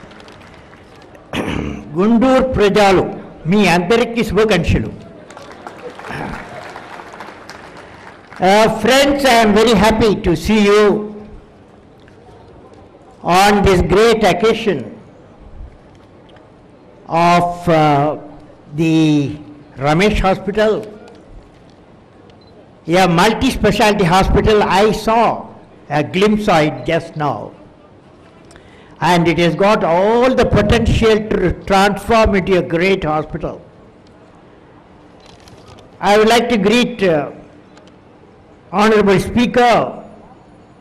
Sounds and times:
Male speech, man speaking: 0:01.9 - 0:05.0, 0:08.4 - 0:11.2, 0:13.2 - 0:15.0, 0:17.1 - 0:21.0, 0:22.9 - 0:27.6, 0:29.0 - 0:33.6, 0:36.0 - 0:37.4, 0:38.8 - 0:40.0.

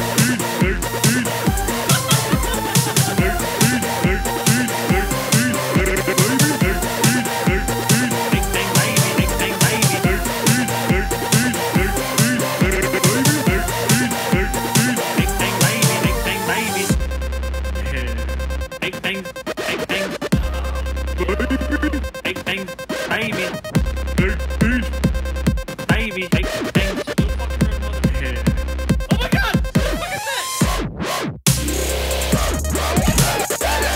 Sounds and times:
Dubstep: 0:00.0 - 0:33.9.

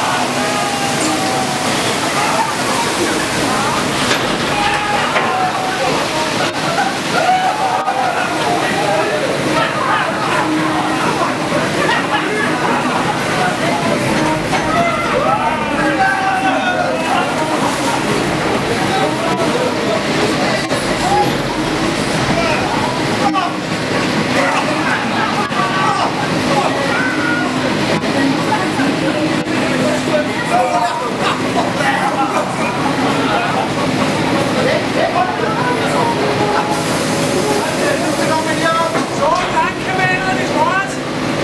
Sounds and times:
Speech: 0:00.0 - 0:41.4
Stream: 0:00.0 - 0:41.4.

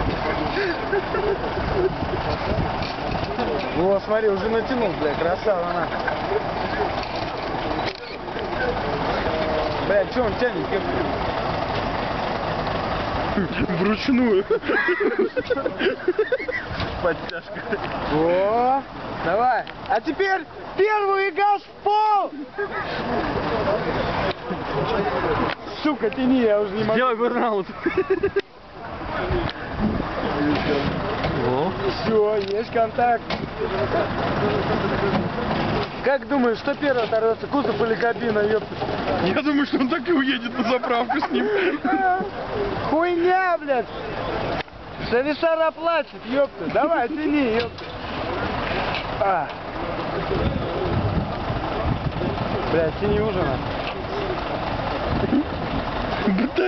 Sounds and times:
Speech: 0:30.3 - 0:41.5.

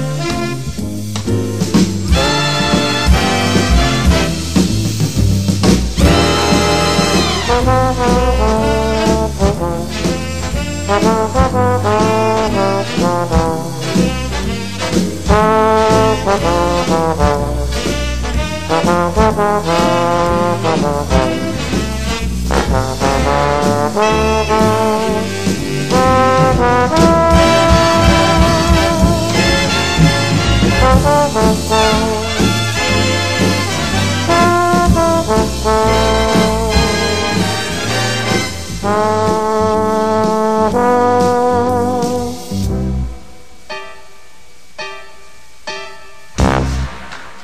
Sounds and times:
Trombone: 0:00.0 - 0:43.5, 0:46.4 - 0:47.4
Jazz: 0:00.0 - 0:47.4.

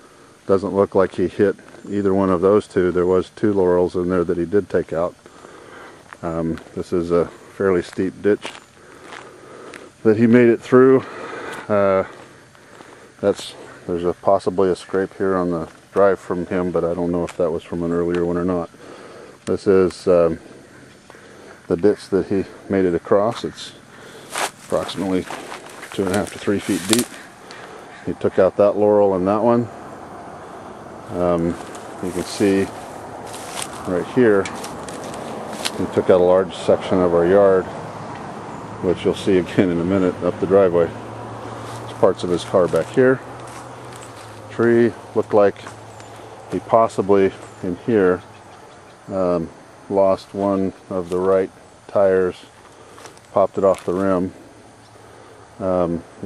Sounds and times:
Speech: 0:00.5 - 0:05.2, 0:06.2 - 0:08.5, 0:10.0 - 0:12.2, 0:13.2 - 0:18.7, 0:19.5 - 0:20.4, 0:21.7 - 0:23.8, 0:24.7 - 0:27.3, 0:28.0 - 0:29.8, 0:31.1 - 0:32.8, 0:33.8 - 0:34.7, 0:35.6 - 0:37.8, 0:38.8 - 0:41.0, 0:41.9 - 0:43.2, 0:44.5 - 0:45.8, 0:46.5 - 0:48.3, 0:49.1 - 0:52.5, 0:53.3 - 0:54.4, 0:55.6 - 0:56.2.

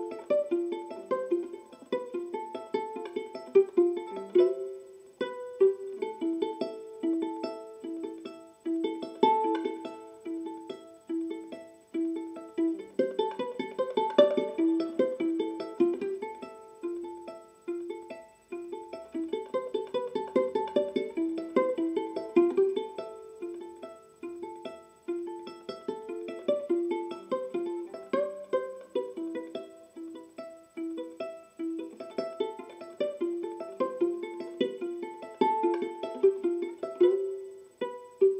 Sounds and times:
Pizzicato: 0:00.0 - 0:38.4.

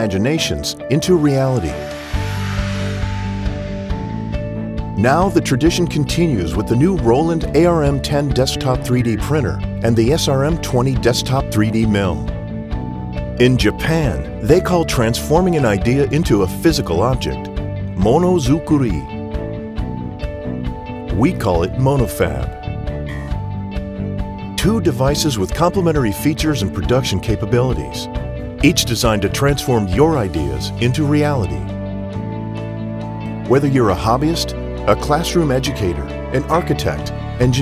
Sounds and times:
Speech: 0:00.0 - 0:01.8, 0:05.0 - 0:12.3, 0:13.4 - 0:19.1, 0:21.1 - 0:23.3, 0:24.6 - 0:28.1, 0:28.7 - 0:31.7, 0:33.5 - 0:37.6
Music: 0:00.0 - 0:37.6.

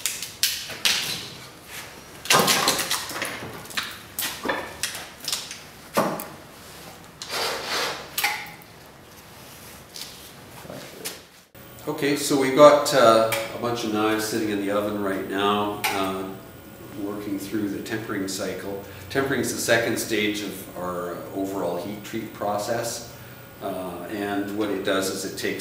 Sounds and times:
Speech: 0:11.8 - 0:25.6.

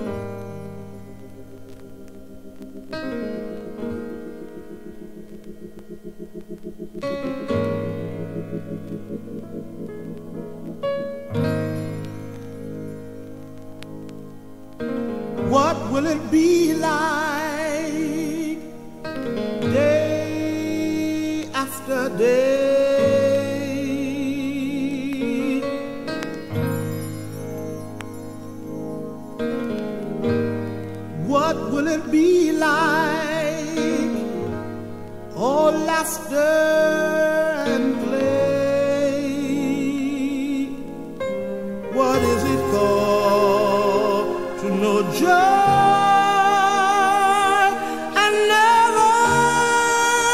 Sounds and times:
Music: 0:00.0 - 0:50.3.

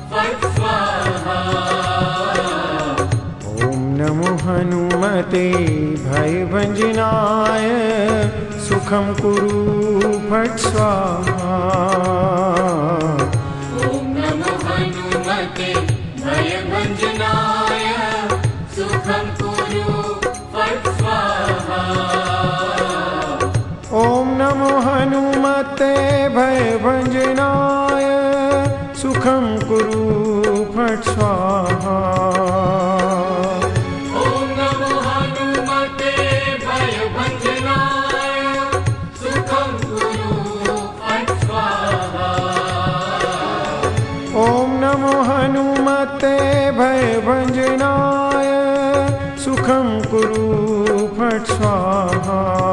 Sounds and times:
Mantra: 0:00.1 - 0:52.7.

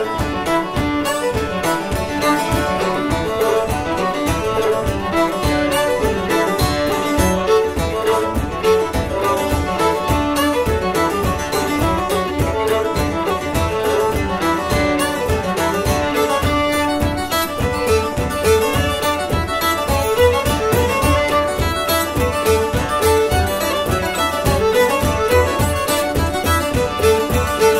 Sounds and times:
Violin, fiddle: 0:00.0 - 0:27.8.

